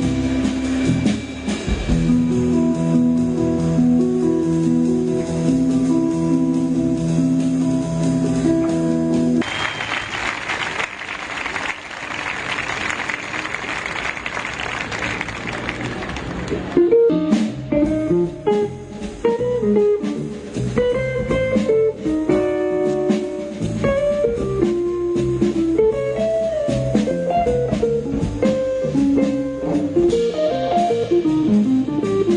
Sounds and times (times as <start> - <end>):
Drum: 0.0 - 6.8, 9.4 - 32.3
Guitar: 0.0 - 9.8, 15.8 - 32.3
Drum kit: 0.0 - 32.3
Jazz: 0.0 - 32.3.